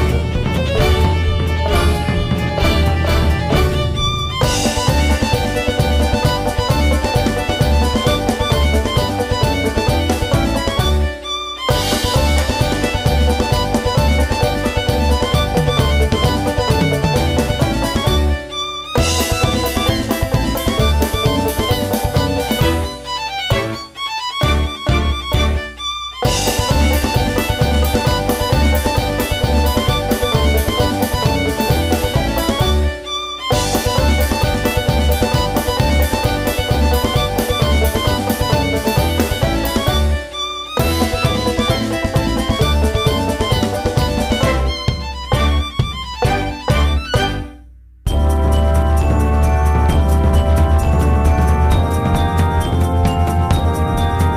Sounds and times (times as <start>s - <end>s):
Exciting music: 0.0s - 54.3s.